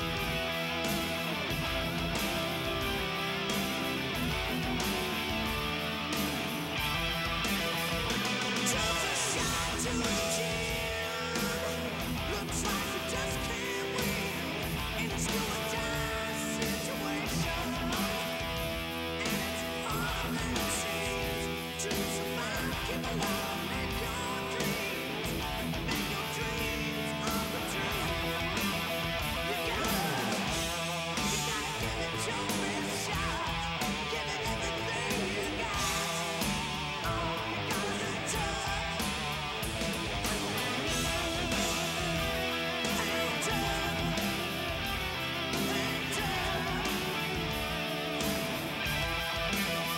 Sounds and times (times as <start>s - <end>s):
Music: 0.0s - 49.9s.